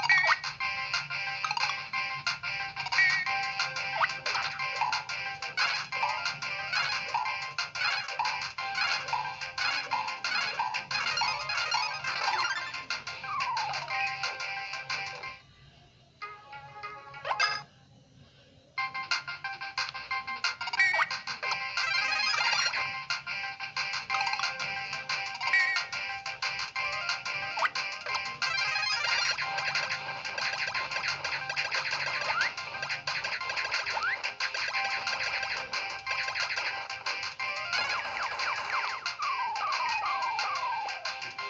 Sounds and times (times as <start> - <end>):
Music: 0.0 - 41.5.